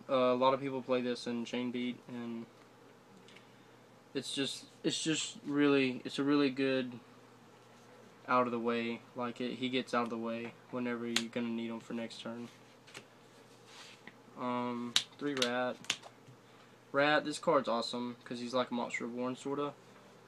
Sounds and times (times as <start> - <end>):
Speech: 0.1 - 2.5, 4.2 - 7.0, 8.3 - 12.6, 14.4 - 15.8, 17.0 - 19.8.